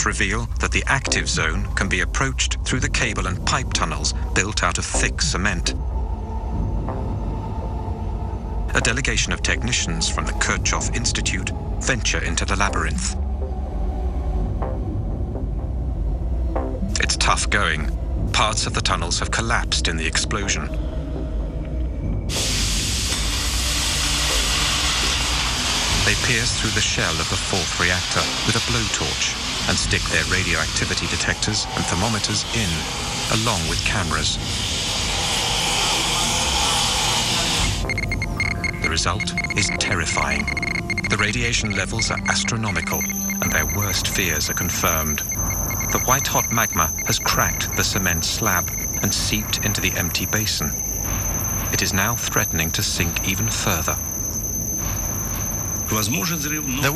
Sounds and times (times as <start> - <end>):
Speech: 0.0 - 5.8, 8.7 - 13.2, 17.0 - 20.8, 26.0 - 34.4, 38.8 - 40.5, 41.1 - 45.3, 46.0 - 50.8, 51.8 - 54.0, 55.9 - 56.9
Music: 0.0 - 56.9.